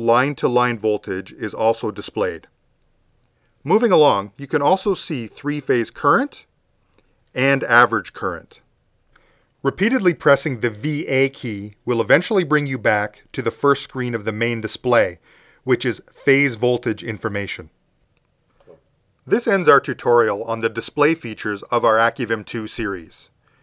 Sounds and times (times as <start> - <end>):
Narration, monologue: 0.0 - 23.6.